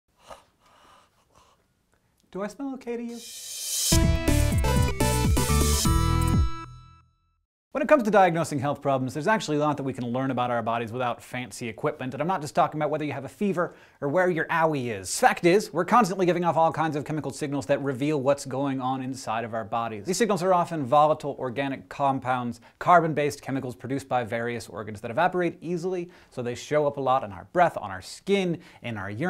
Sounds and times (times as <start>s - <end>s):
Speech: 2.3s - 3.2s, 7.8s - 29.2s
Music: 3.2s - 7.4s
Inside, small room: 7.7s - 29.2s.